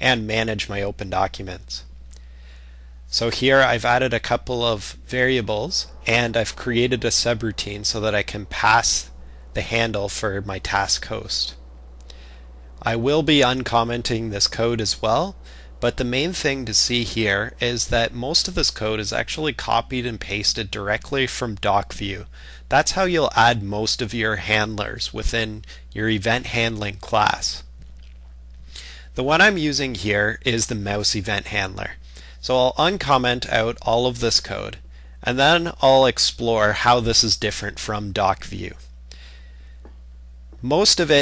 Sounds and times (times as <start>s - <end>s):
Speech: 0.0s - 1.9s, 3.1s - 11.6s, 12.8s - 27.7s, 29.2s - 38.9s, 40.6s - 41.2s.